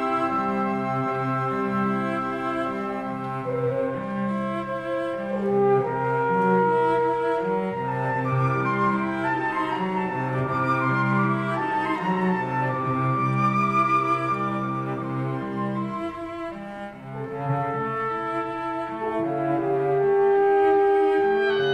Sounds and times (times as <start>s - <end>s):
Orchestra: 0.0s - 21.7s.